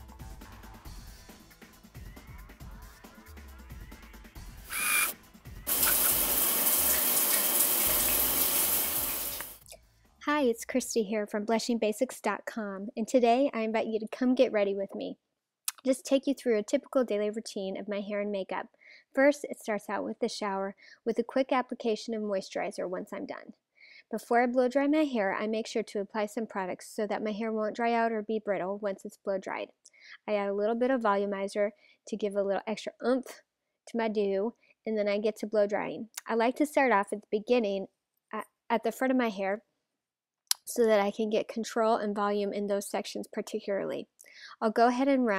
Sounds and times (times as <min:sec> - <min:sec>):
Music: 0:00.0 - 0:07.1
Speech: 0:10.2 - 0:39.6, 0:40.5 - 0:45.3.